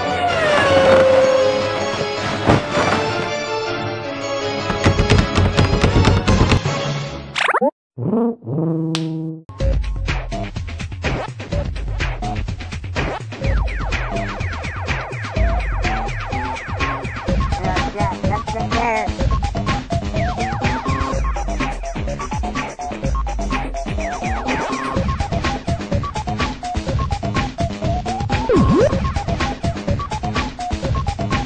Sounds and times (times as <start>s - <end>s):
Music: 0.0s - 7.4s, 9.5s - 31.4s.